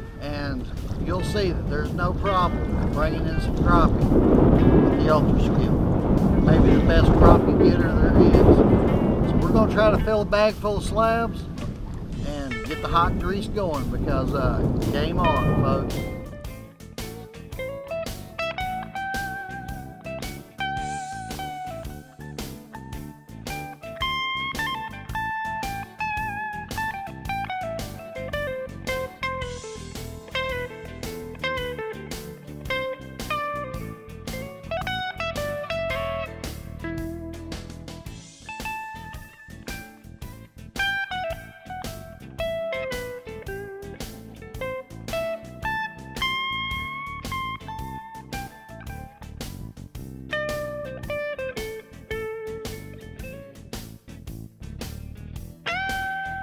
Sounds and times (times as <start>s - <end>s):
Music: 0.0s - 56.4s
Speech: 0.2s - 3.9s, 4.9s - 5.7s, 6.5s - 8.6s, 9.3s - 11.5s, 12.2s - 16.0s.